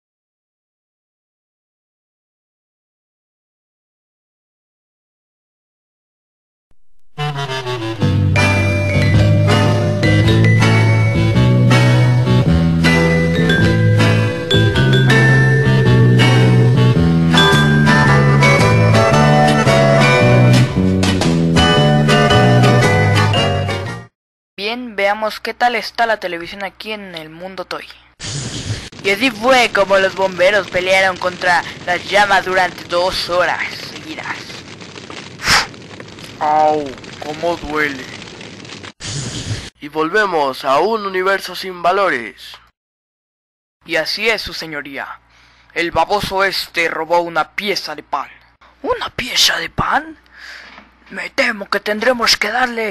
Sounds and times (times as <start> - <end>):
Speech: 24.6 - 28.1, 29.0 - 34.6, 36.4 - 38.1, 39.8 - 42.6, 43.9 - 45.2, 45.8 - 50.2, 51.1 - 52.9.